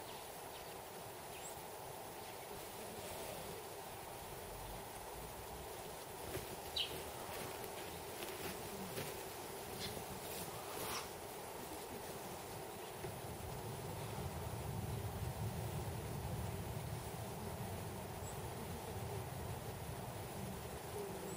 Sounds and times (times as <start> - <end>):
Snake: 0.0 - 15.9
Outside, rural or natural: 0.0 - 21.3.